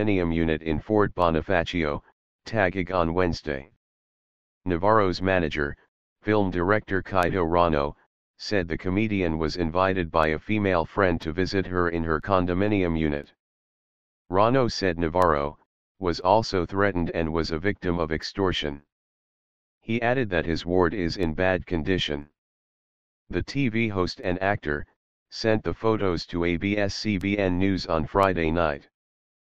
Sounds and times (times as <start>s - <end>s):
Speech: 0.0s - 3.8s, 4.7s - 13.4s, 14.3s - 18.9s, 19.8s - 22.4s, 23.3s - 28.9s.